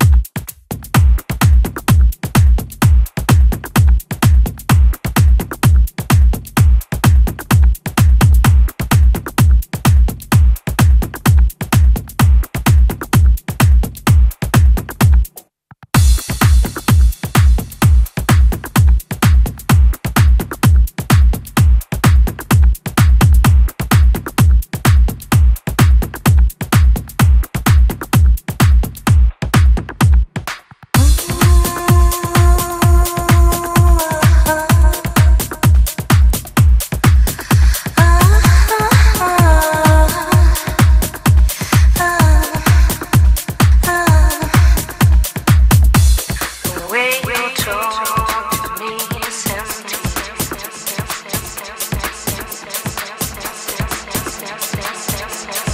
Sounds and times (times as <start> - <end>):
Music: 0.0 - 55.7.